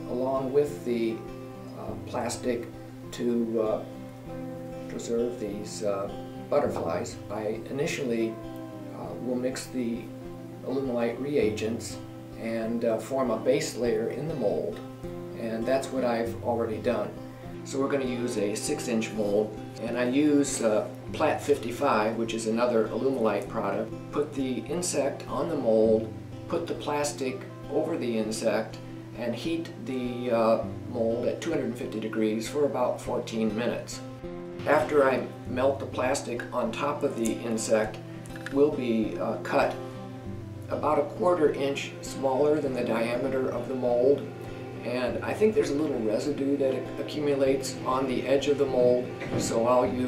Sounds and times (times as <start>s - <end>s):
Speech: 0.0s - 1.2s, 1.8s - 3.9s, 4.9s - 8.4s, 9.0s - 14.8s, 15.4s - 34.0s, 34.6s - 39.8s, 40.7s - 50.0s
Music: 0.0s - 50.0s.